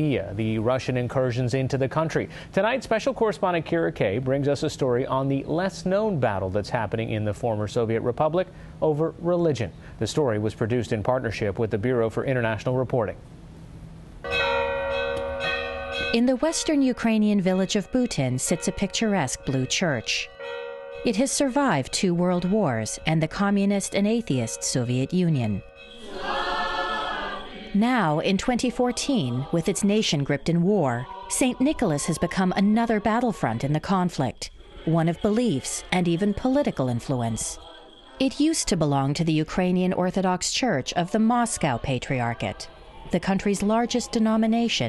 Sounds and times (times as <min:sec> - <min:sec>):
Speech: 0:00.0 - 0:13.2, 0:16.2 - 0:20.3, 0:21.1 - 0:25.6, 0:27.8 - 0:37.6, 0:38.2 - 0:44.8
Music: 0:23.8 - 0:33.8, 0:34.6 - 0:40.0.